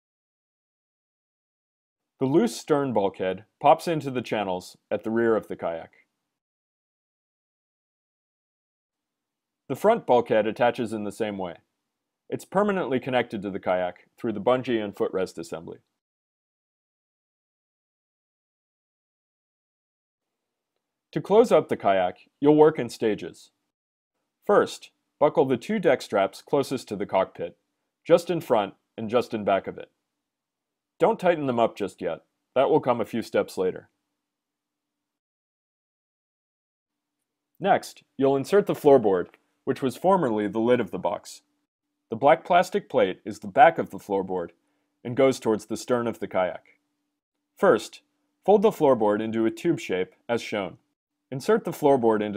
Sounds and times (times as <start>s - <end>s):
Speech: 2.2s - 6.0s, 9.7s - 11.7s, 12.3s - 15.9s, 21.2s - 23.6s, 24.4s - 30.0s, 31.0s - 33.9s, 37.6s - 41.5s, 42.1s - 46.8s, 47.6s - 52.3s.